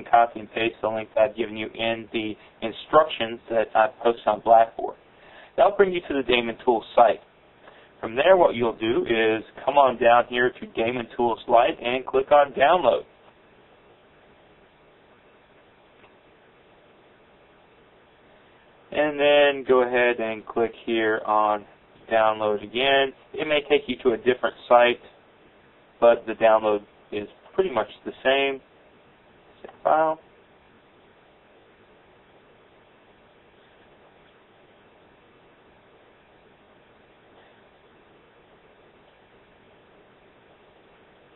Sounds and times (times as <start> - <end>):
Speech: 0.0 - 5.0, 5.6 - 7.2, 8.0 - 13.1, 18.9 - 25.2, 26.0 - 28.6, 29.6 - 30.2.